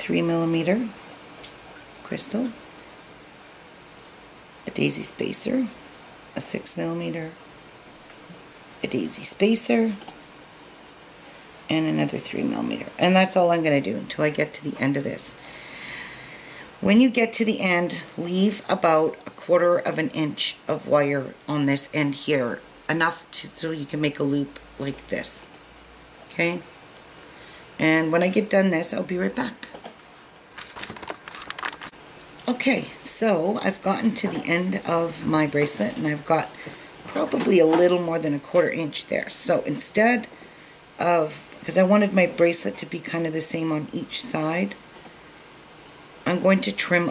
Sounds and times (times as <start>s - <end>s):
Speech: 0.0s - 1.0s, 2.0s - 2.6s, 4.7s - 5.8s, 6.4s - 7.4s, 8.8s - 10.1s, 11.7s - 15.4s, 16.8s - 25.5s, 26.3s - 26.7s, 27.8s - 29.8s, 32.5s - 40.3s, 41.0s - 44.8s, 46.3s - 47.1s.